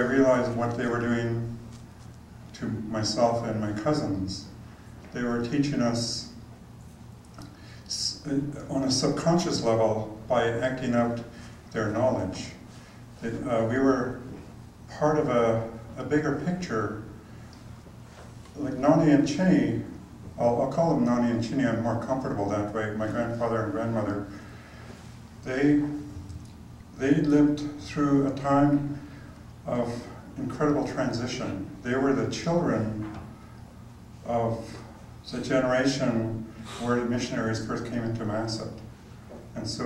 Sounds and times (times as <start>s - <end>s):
Speech: 0.0s - 1.7s, 2.5s - 6.4s, 7.9s - 17.2s, 18.5s - 24.4s, 25.4s - 26.2s, 27.0s - 33.3s, 34.2s - 39.8s.